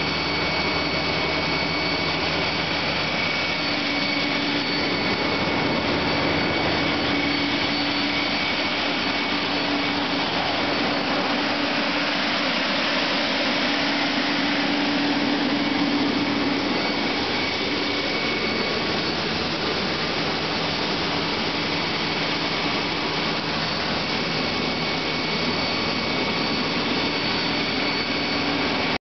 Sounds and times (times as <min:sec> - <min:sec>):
Pump (liquid): 0:00.0 - 0:29.0.